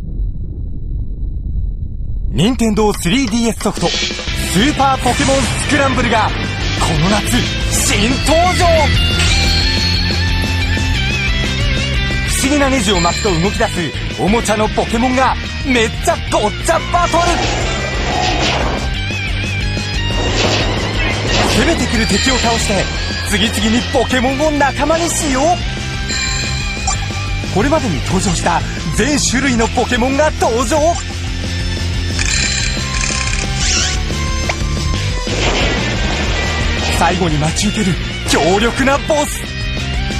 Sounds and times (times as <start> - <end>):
Speech: 2.3 - 8.9, 12.3 - 17.4, 21.5 - 25.6, 27.5 - 31.0, 36.9 - 39.5
Music: 3.6 - 40.1.